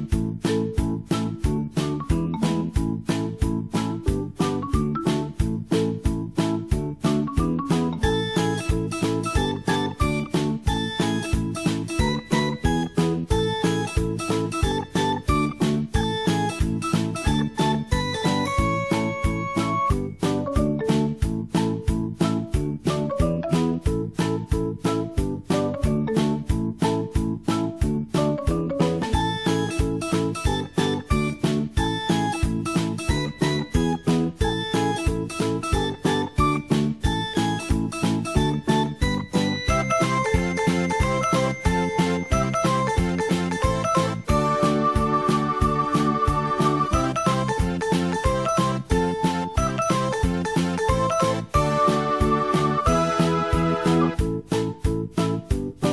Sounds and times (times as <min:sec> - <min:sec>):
Music: 0:00.0 - 0:55.9.